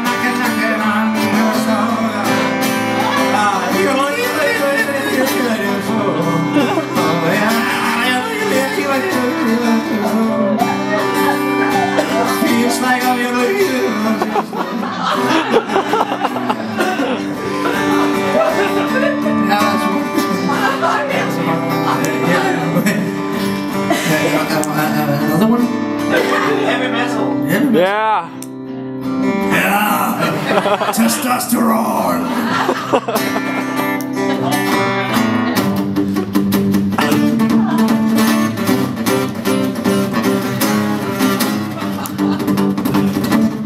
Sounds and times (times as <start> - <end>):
Music: 0.0 - 43.6.